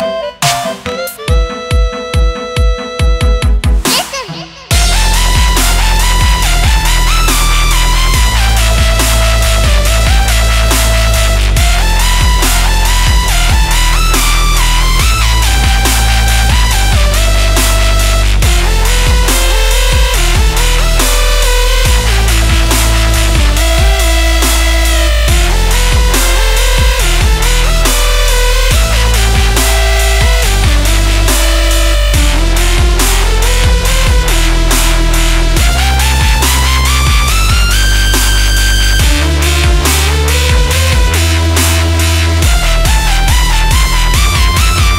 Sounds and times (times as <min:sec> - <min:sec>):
Dubstep: 0:00.0 - 0:44.9
Soul music: 0:00.0 - 0:44.9.